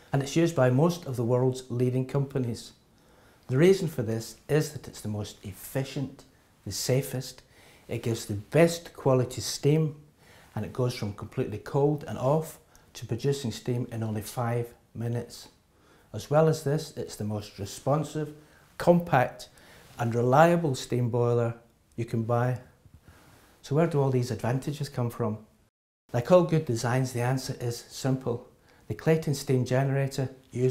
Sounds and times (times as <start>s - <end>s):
Speech: 0.0s - 2.8s, 3.5s - 22.8s, 23.6s - 25.5s, 26.1s - 30.7s.